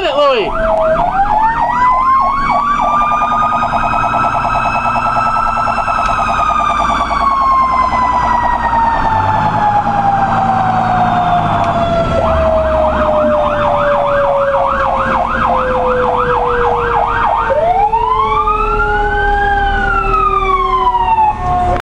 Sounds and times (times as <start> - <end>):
Vehicle: 0.0 - 21.8
Engine: 0.7 - 21.8.